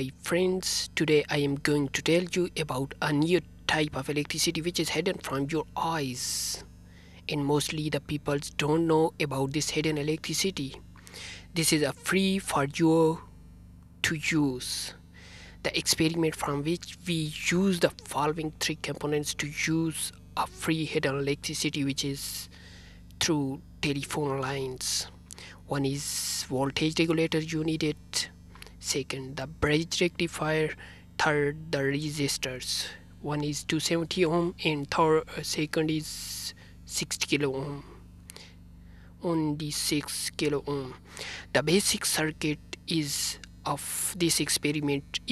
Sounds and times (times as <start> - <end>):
Speech: 0.0 - 13.4, 14.0 - 22.6, 23.2 - 38.5, 39.2 - 45.3.